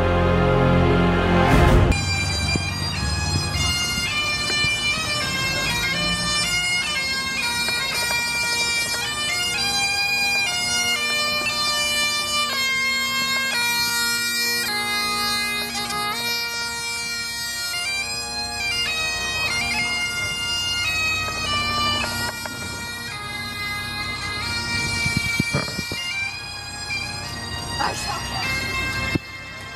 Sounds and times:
Bagpipes: 0:00.0 - 0:29.7.

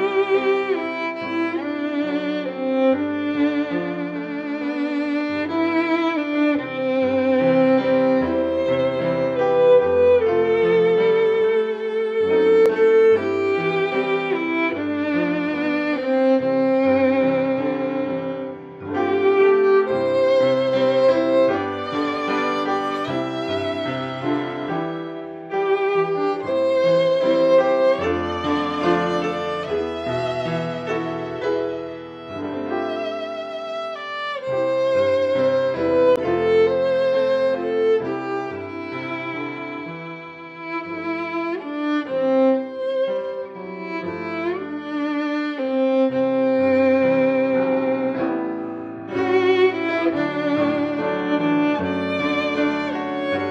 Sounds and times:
Violin, fiddle: 0:00.0 - 0:53.5.

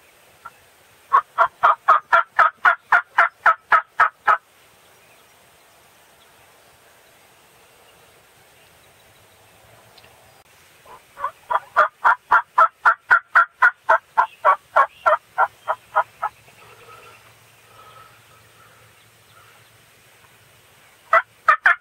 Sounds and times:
Gobble: 0:01.1 - 0:04.4, 0:10.9 - 0:16.3, 0:21.1 - 0:21.8.

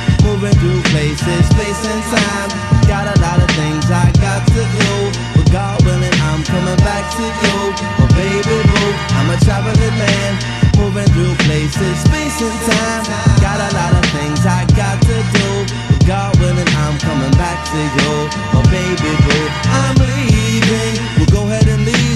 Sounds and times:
Music: 0:00.0 - 0:22.1.

